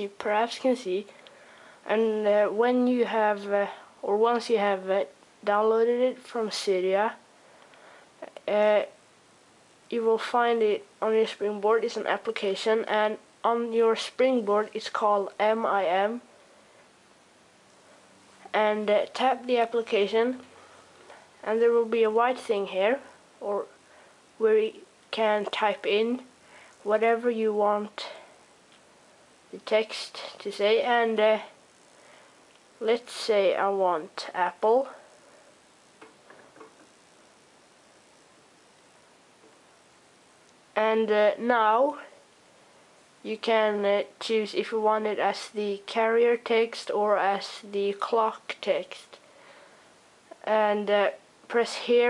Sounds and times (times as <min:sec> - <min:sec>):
Speech: 0:00.0 - 0:01.2, 0:01.8 - 0:07.2, 0:08.2 - 0:09.0, 0:09.9 - 0:16.3, 0:18.5 - 0:20.5, 0:21.4 - 0:23.8, 0:24.4 - 0:28.3, 0:29.5 - 0:31.6, 0:32.8 - 0:35.1, 0:40.8 - 0:42.2, 0:43.2 - 0:49.2, 0:50.4 - 0:52.1.